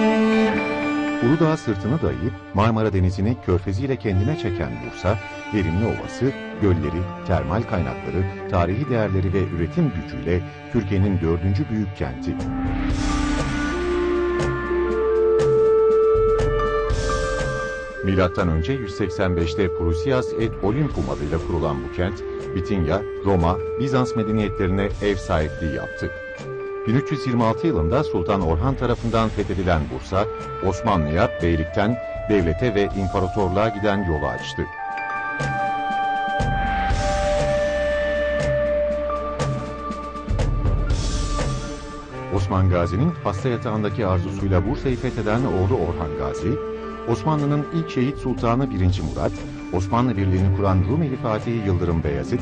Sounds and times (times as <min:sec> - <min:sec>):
Music: 0:00.0 - 0:52.4
Speech: 0:01.2 - 0:12.5, 0:18.0 - 0:26.1, 0:26.9 - 0:34.7, 0:42.3 - 0:52.4.